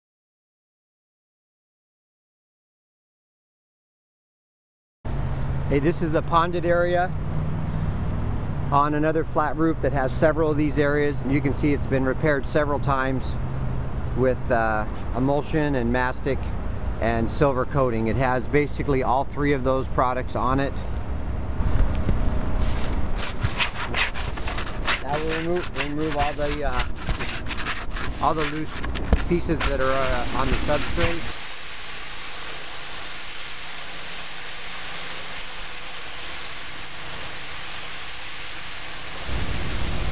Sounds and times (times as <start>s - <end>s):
Speech: 5.7s - 7.1s, 8.7s - 13.4s, 14.2s - 20.8s, 25.0s - 26.9s, 28.2s - 28.7s, 29.3s - 31.3s.